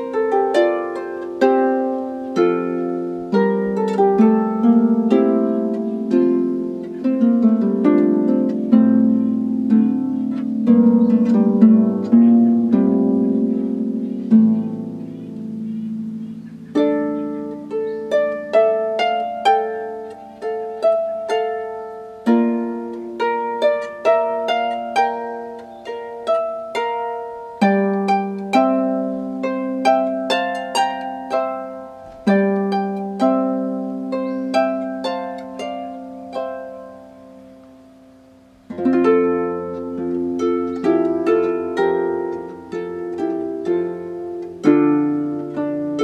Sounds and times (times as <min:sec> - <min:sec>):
Soul music: 0:00.0 - 0:46.0.